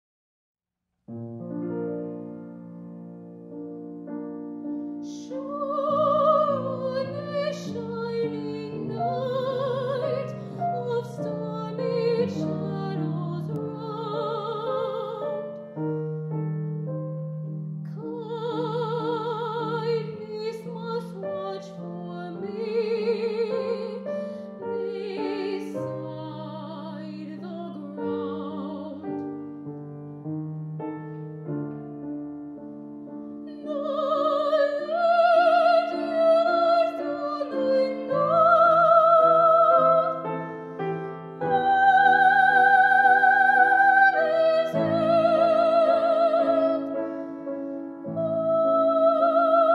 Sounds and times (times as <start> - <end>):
Piano: 1.0 - 49.7
Classical music: 1.1 - 49.7.